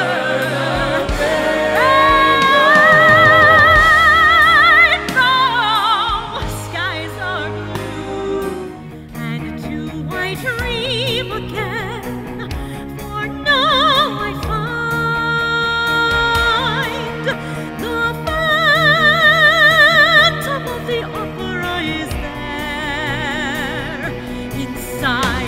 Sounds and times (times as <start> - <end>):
Music: 0.0 - 25.4.